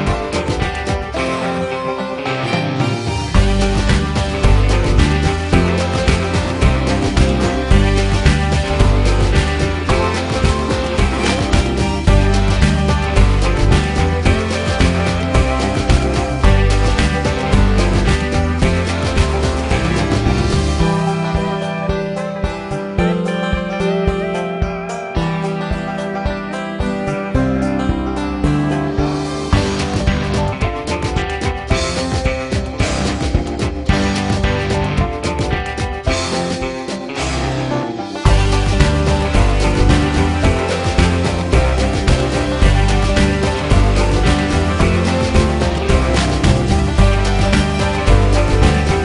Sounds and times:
Music: 0.0 - 49.0.

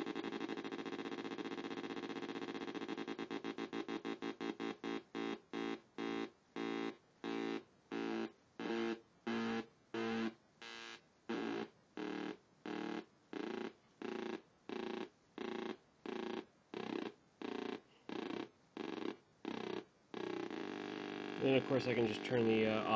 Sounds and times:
Speech: 21.4 - 22.9.

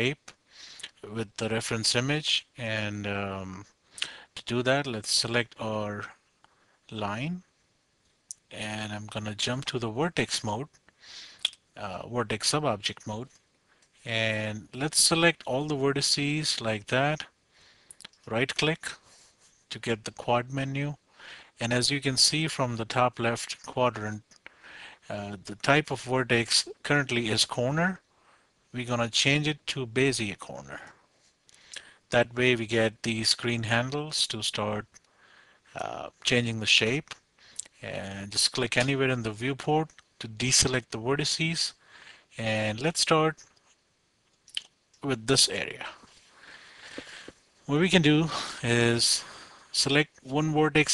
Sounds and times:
Speech: 0.0 - 6.2, 6.9 - 7.5, 8.3 - 10.8, 11.8 - 13.3, 14.1 - 17.4, 18.2 - 19.0, 19.7 - 21.0, 21.6 - 24.2, 25.1 - 28.0, 28.7 - 31.0, 32.1 - 34.9, 35.8 - 41.8, 42.4 - 43.4, 44.6 - 46.0, 47.7 - 50.9.

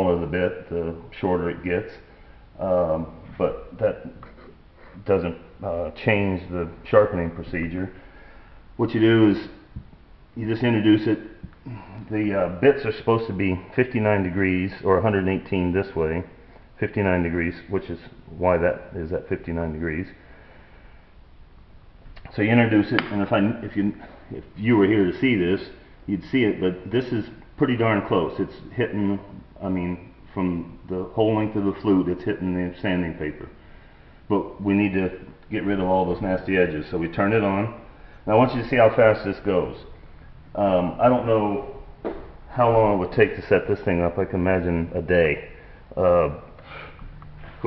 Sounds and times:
Speech: 0.0 - 8.0, 8.8 - 9.7, 10.4 - 20.2, 22.2 - 33.6, 34.3 - 40.0, 40.6 - 46.9
Inside, small room: 0.0 - 47.6.

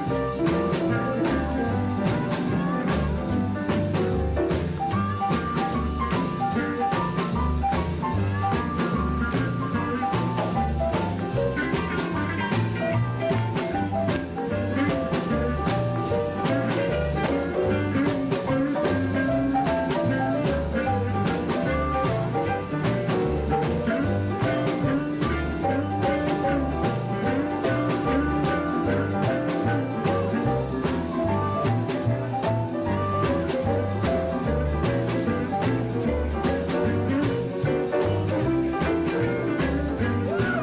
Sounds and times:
Guitar: 0.0 - 40.6
Jazz: 0.0 - 40.6.

